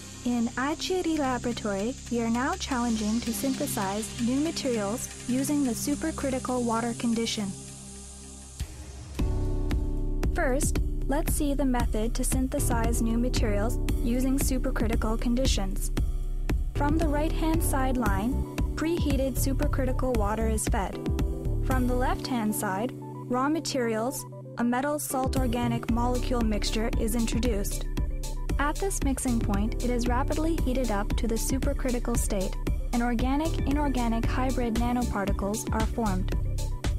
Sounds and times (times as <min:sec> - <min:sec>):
Music: 0:00.0 - 0:36.9
Speech: 0:00.2 - 0:07.6, 0:10.4 - 0:15.9, 0:16.8 - 0:21.0, 0:21.7 - 0:27.9, 0:28.6 - 0:36.4.